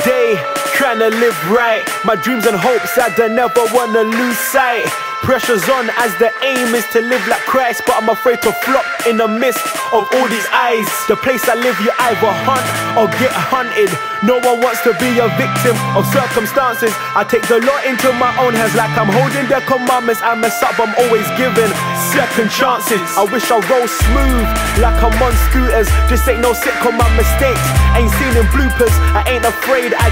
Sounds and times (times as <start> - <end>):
Rhythm and blues: 0.0 - 30.1.